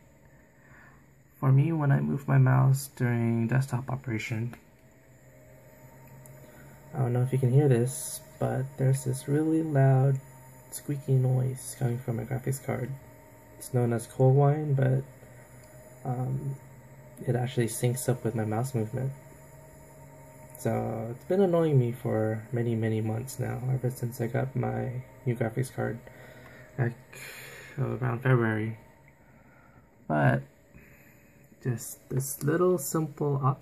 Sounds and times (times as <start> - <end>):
Speech: 1.4 - 4.6, 7.0 - 10.2, 10.8 - 13.0, 13.6 - 15.1, 16.1 - 16.6, 17.2 - 19.1, 20.6 - 26.0, 26.8 - 27.0, 27.8 - 28.8, 30.1 - 30.5, 31.6 - 33.6.